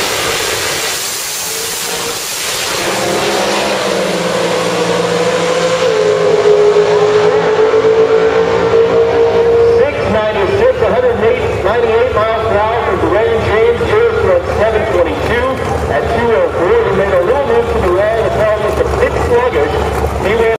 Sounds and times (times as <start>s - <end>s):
Speech: 9.8s - 20.5s.